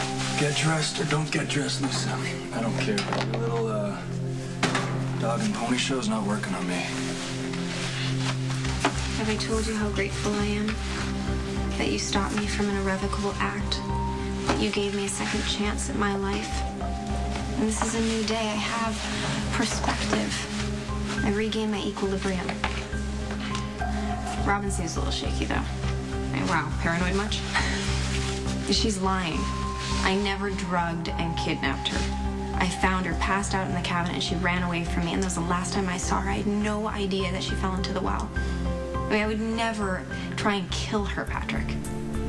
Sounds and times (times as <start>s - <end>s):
Music: 0.0s - 42.2s.